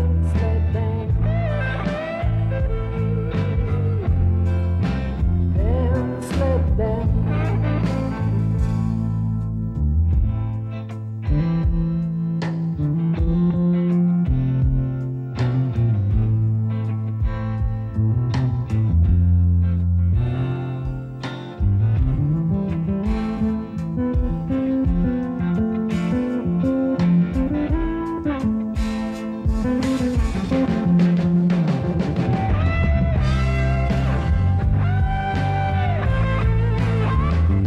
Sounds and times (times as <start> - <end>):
Blues: 0.0 - 37.6.